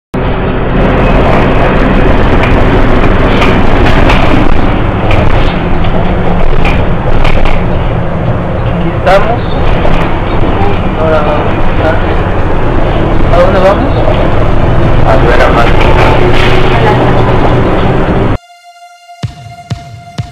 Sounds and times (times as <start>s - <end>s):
Speech: 8.8s - 9.6s, 10.4s - 12.2s, 13.3s - 14.2s, 15.0s - 17.3s.